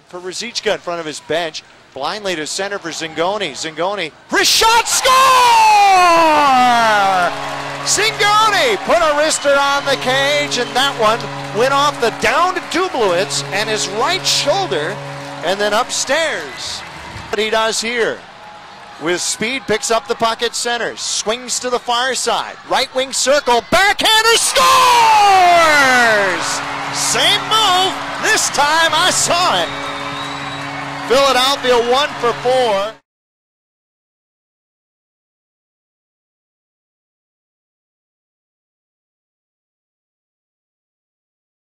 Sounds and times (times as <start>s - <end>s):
Speech: 0.1s - 7.3s, 7.9s - 16.8s, 17.4s - 18.2s, 19.0s - 29.7s, 31.1s - 33.0s
Cheering: 4.4s - 21.0s, 21.8s - 33.0s.